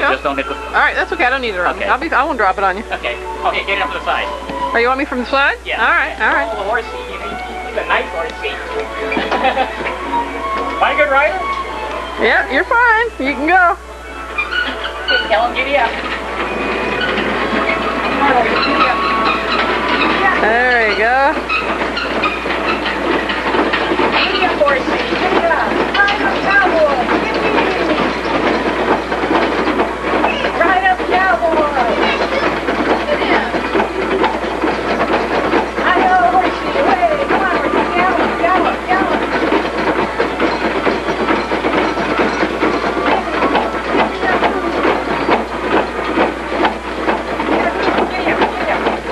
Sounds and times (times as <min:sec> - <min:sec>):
Music: 0:00.0 - 0:49.1.